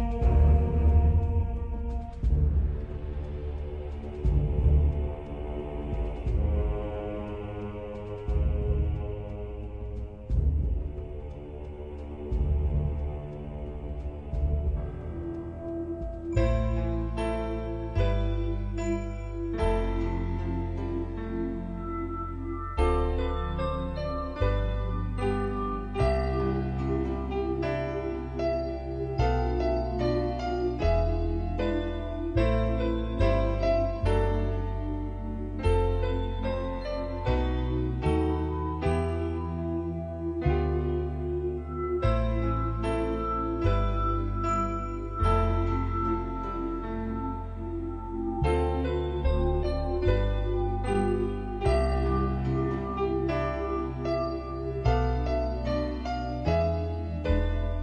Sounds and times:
Harpsichord: 0.0s - 57.8s.

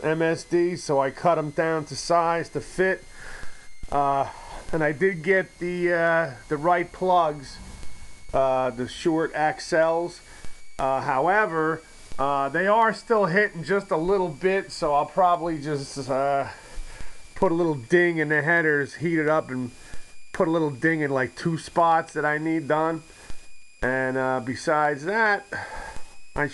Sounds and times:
Speech: 0.0s - 3.0s, 3.9s - 7.6s, 8.4s - 10.2s, 10.8s - 16.6s, 17.4s - 19.7s, 20.4s - 23.1s, 23.8s - 25.6s.

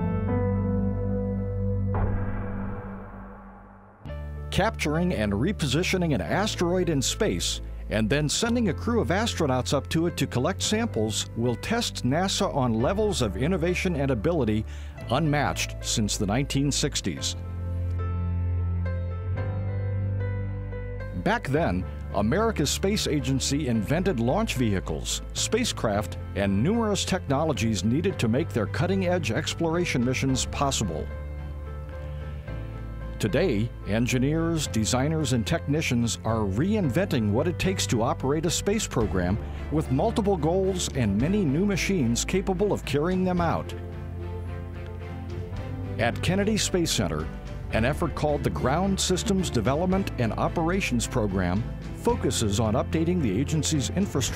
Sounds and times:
Music: 0.0s - 54.3s
Speech: 4.5s - 17.4s, 21.2s - 31.1s, 33.2s - 43.8s, 46.0s - 54.3s.

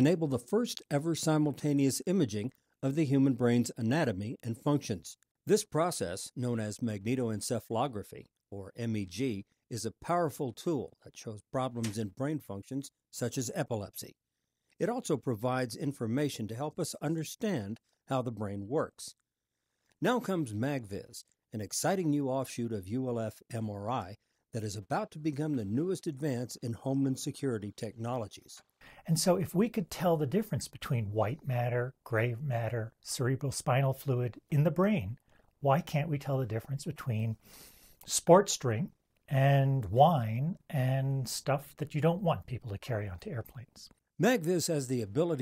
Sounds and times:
Speech: 0.0s - 14.2s, 14.8s - 19.2s, 20.0s - 37.4s, 38.0s - 45.4s.

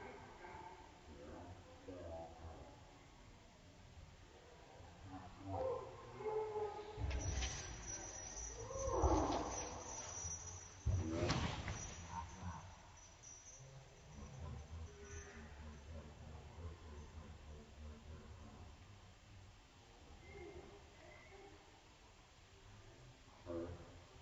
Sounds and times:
Speech: 0.0s - 3.3s, 14.4s - 19.1s
Inside, large room or hall: 0.0s - 12.7s
Dog: 5.1s - 18.5s.

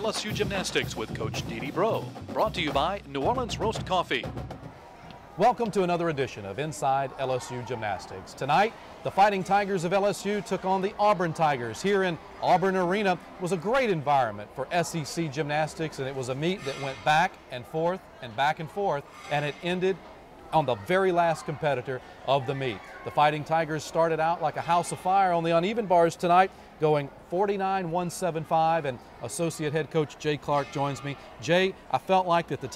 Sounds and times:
Speech: 0.0s - 4.3s, 5.4s - 32.7s.

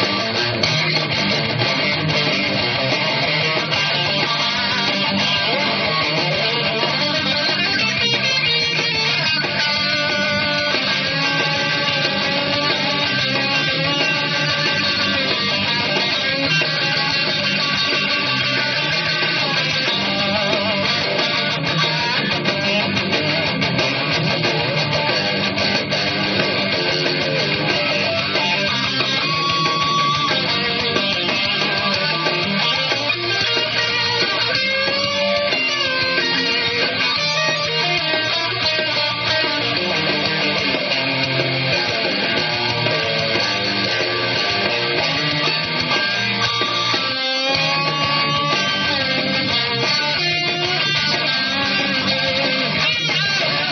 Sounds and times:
Electric guitar: 0.0s - 53.7s.

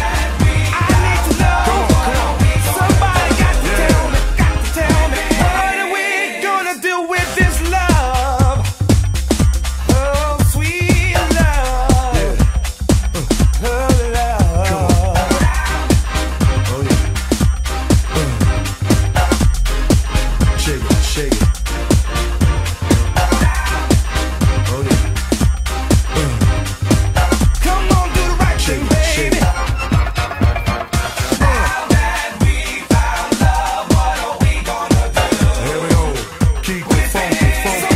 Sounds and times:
Disco: 0.0s - 37.9s.

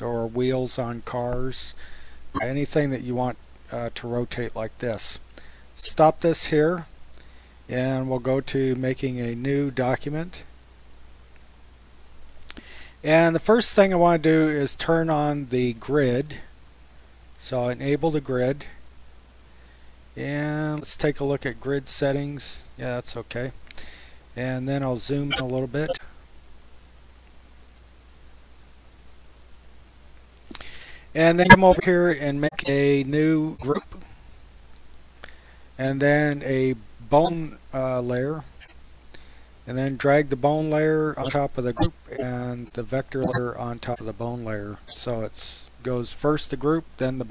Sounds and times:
Speech: 0.0s - 1.8s, 2.4s - 5.2s, 5.8s - 6.9s, 7.7s - 10.5s, 13.0s - 16.5s, 17.4s - 18.8s, 20.2s - 23.6s, 24.4s - 26.1s, 31.2s - 34.0s, 35.8s - 38.5s, 39.7s - 47.3s.

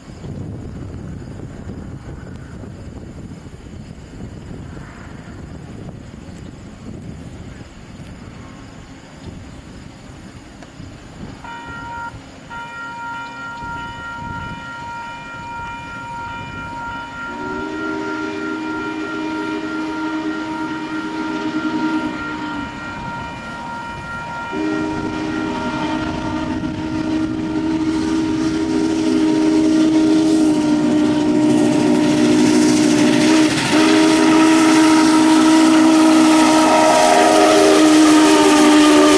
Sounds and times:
Railroad car, train wagon: 0.0s - 39.1s
Train whistle: 11.4s - 39.1s.

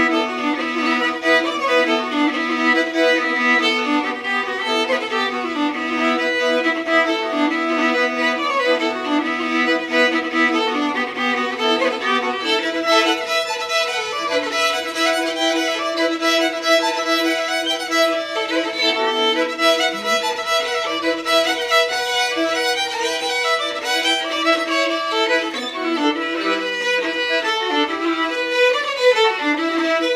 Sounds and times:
Violin, fiddle: 0.0s - 30.1s.

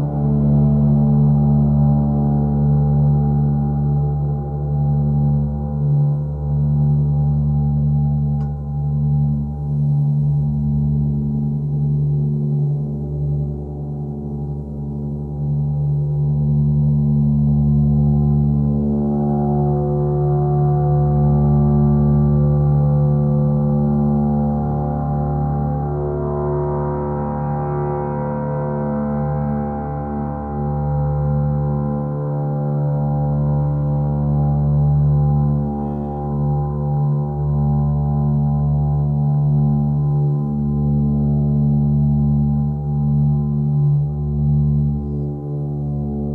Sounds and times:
Gong: 16.5s - 46.3s.

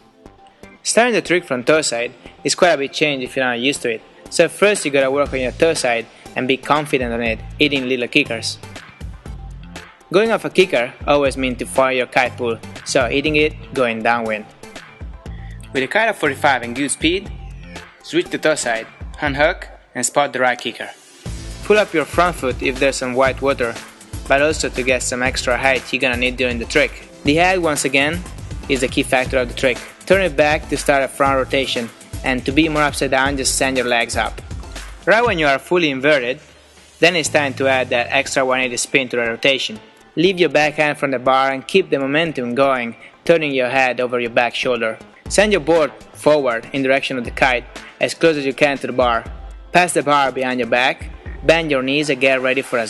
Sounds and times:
Music: 0.0s - 52.9s
Speech: 0.8s - 8.6s, 10.1s - 14.5s, 15.7s - 17.3s, 18.1s - 21.0s, 21.7s - 34.4s, 35.1s - 36.4s, 37.0s - 52.9s.

